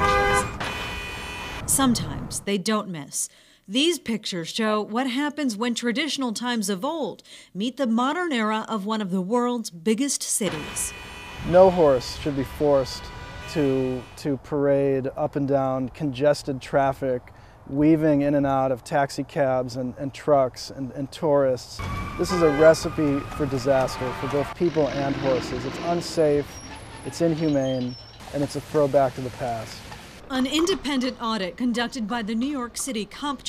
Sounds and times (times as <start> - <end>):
Speech: 11.5 - 26.5, 27.1 - 33.4.